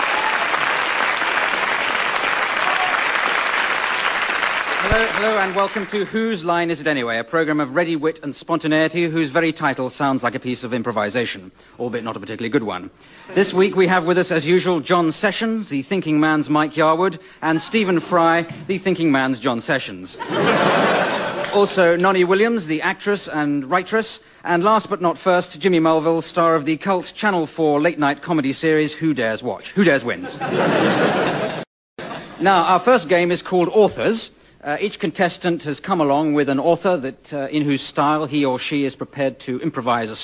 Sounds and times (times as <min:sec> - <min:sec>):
Speech: 0:04.8 - 0:20.2, 0:21.5 - 0:30.4, 0:32.4 - 0:40.2.